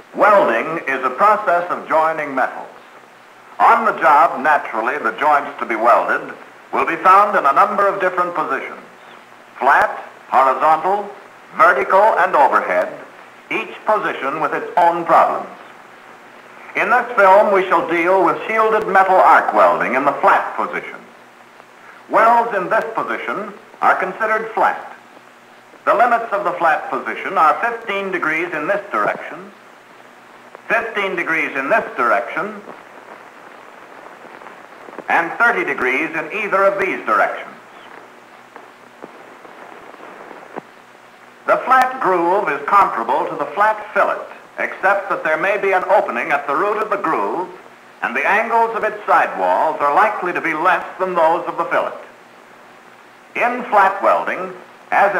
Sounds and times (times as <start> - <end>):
Speech: 0.2 - 2.9, 3.6 - 8.9, 9.6 - 15.7, 16.7 - 21.1, 22.1 - 25.0, 25.8 - 29.6, 30.7 - 32.8, 35.1 - 37.7, 41.5 - 52.2, 53.4 - 55.1.